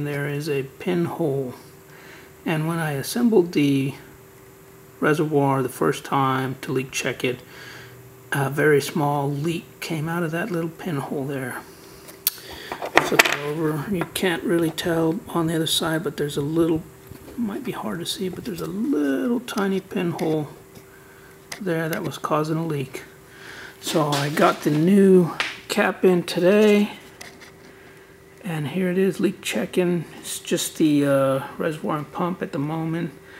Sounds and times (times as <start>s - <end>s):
Speech: 0.0s - 1.6s, 2.4s - 4.1s, 5.0s - 7.4s, 8.3s - 11.7s, 13.0s - 20.6s, 21.6s - 23.1s, 23.8s - 27.0s, 28.4s - 33.2s.